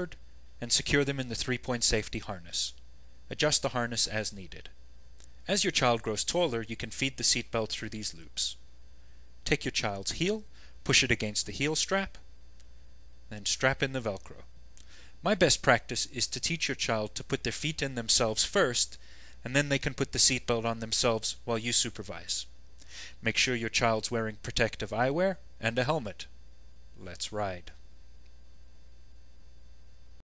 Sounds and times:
Speech: 0:00.0 - 0:04.8, 0:05.5 - 0:08.6, 0:09.5 - 0:12.2, 0:13.3 - 0:14.5, 0:15.2 - 0:22.5, 0:23.2 - 0:26.3, 0:27.0 - 0:27.8.

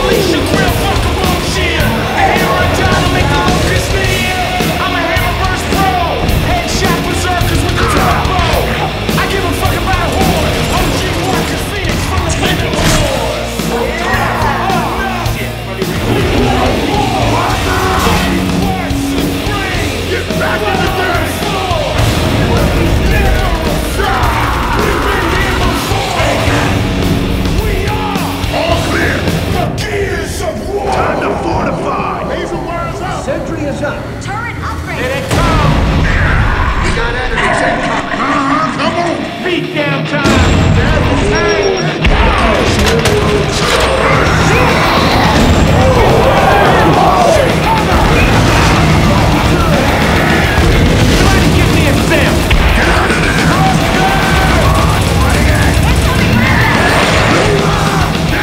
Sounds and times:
Speech: 0:00.0 - 0:26.8, 0:27.6 - 0:58.4
Music: 0:00.0 - 0:58.4.

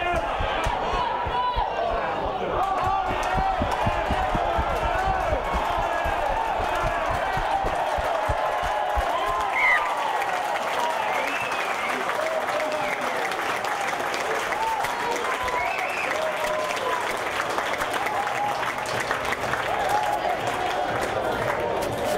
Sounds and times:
Run: 0:00.0 - 0:22.1
Speech: 0:10.7 - 0:13.6.

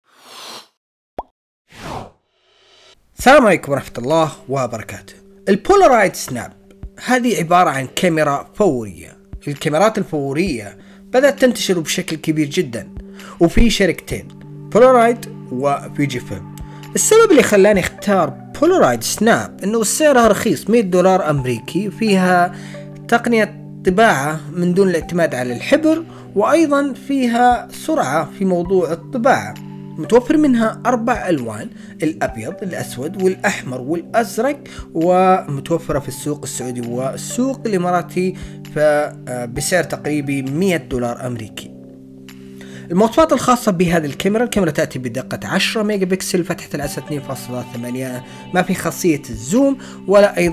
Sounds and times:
Speech: 0:03.2 - 0:22.5, 0:23.1 - 0:41.7, 0:42.9 - 0:50.5.

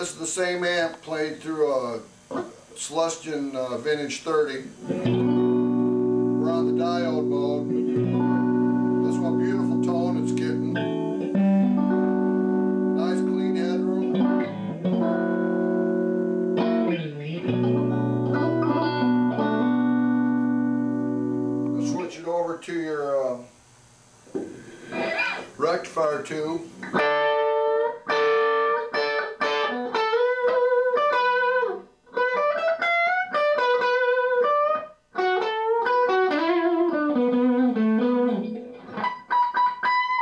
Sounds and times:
Speech: 0:00.0 - 0:02.1, 0:02.8 - 0:04.7, 0:06.4 - 0:07.7, 0:09.0 - 0:10.8, 0:13.0 - 0:14.1, 0:21.8 - 0:23.5, 0:25.6 - 0:26.7
Guitar: 0:00.0 - 0:40.2
Inside, small room: 0:00.0 - 0:40.2.

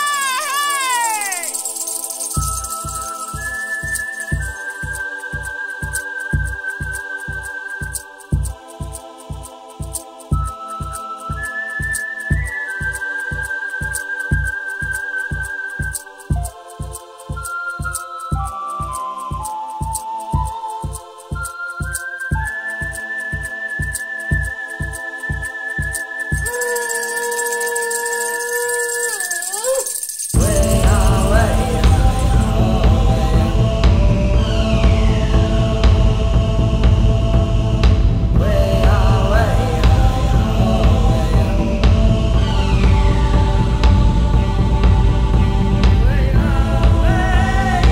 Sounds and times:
Music: 0:00.0 - 0:29.4, 0:30.3 - 0:47.9.

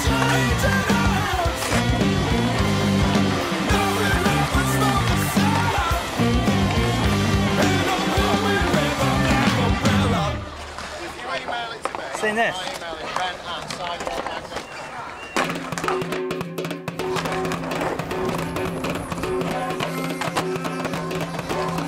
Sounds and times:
Music: 0:00.0 - 0:10.7, 0:15.4 - 0:21.8
Skateboard: 0:00.0 - 0:16.0, 0:17.1 - 0:21.8
Speech: 0:11.0 - 0:15.3.

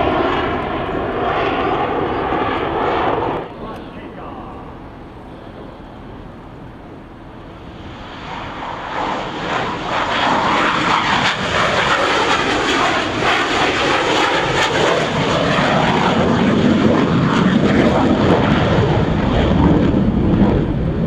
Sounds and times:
Speech: 0:03.6 - 0:04.7.

